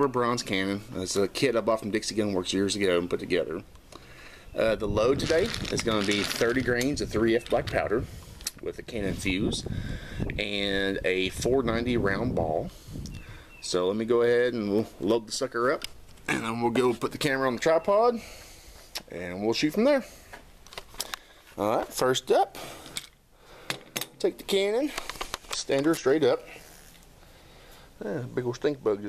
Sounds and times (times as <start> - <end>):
Speech: 0.0 - 3.7, 4.6 - 9.7, 10.4 - 12.7, 13.6 - 18.2, 19.1 - 20.1, 21.6 - 22.6, 24.2 - 25.0, 25.6 - 26.6, 28.0 - 29.0.